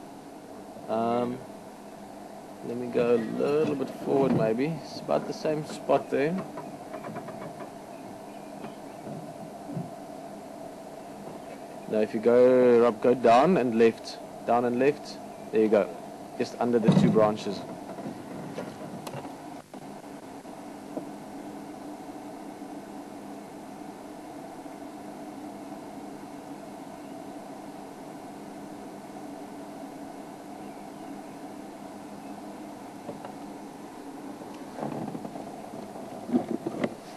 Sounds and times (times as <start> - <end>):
Speech: 0.9 - 1.4, 2.7 - 6.5, 11.9 - 17.7
Bird: 5.9 - 9.4, 30.5 - 32.5.